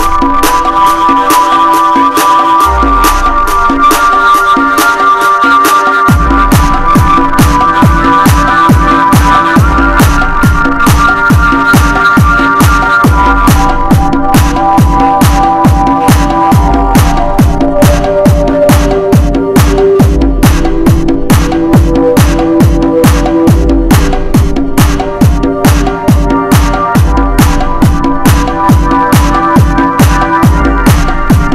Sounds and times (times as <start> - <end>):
Electronic music: 0.0 - 31.5.